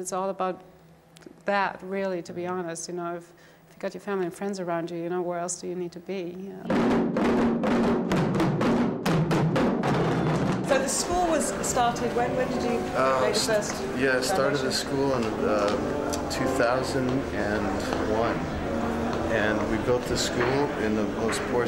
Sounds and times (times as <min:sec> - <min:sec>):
Inside, large room or hall: 0:00.0 - 0:21.6
Music: 0:06.7 - 0:21.6.